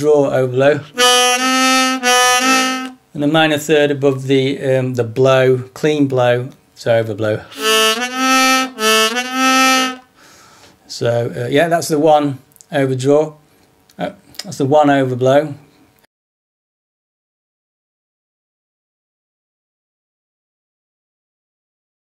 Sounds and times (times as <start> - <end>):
Speech: 0.0 - 0.9, 3.2 - 7.5, 10.9 - 13.4, 14.0 - 15.7.